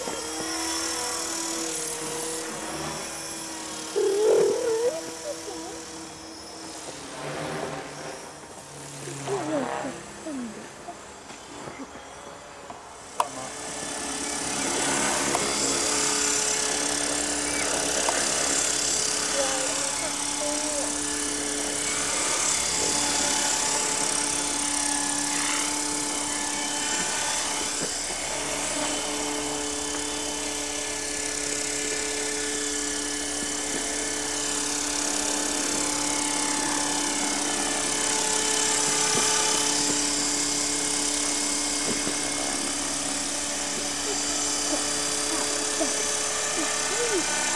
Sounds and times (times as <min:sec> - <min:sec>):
Helicopter: 0:00.0 - 0:47.5.